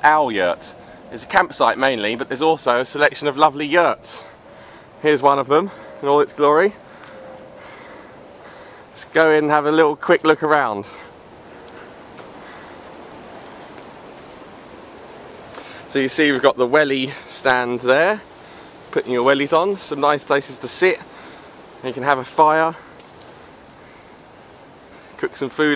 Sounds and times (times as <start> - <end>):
Speech: 0.0 - 4.3, 5.0 - 6.8, 9.0 - 11.1, 15.9 - 18.2, 18.9 - 21.1, 21.8 - 22.8, 25.2 - 25.7.